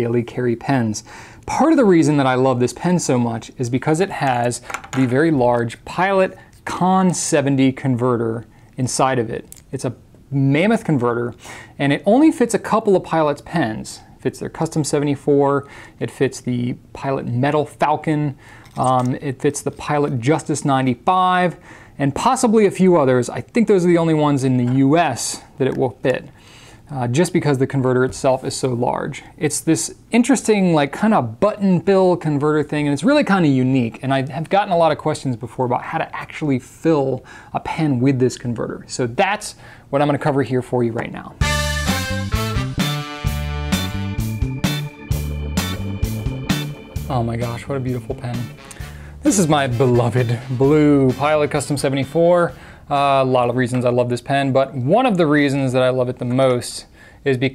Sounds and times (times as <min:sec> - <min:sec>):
Speech: 0:00.0 - 0:41.4, 0:47.1 - 0:48.6, 0:49.2 - 0:57.5.